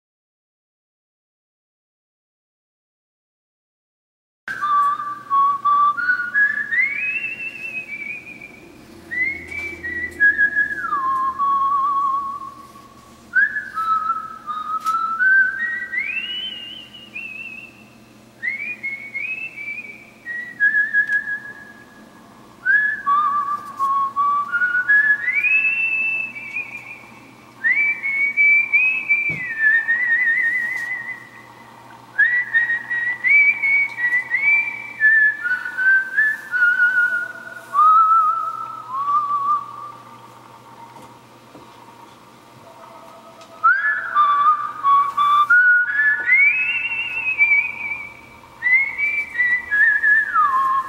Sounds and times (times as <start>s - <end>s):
Whistle: 4.5s - 12.8s, 13.4s - 31.5s, 32.2s - 40.0s, 43.6s - 50.8s.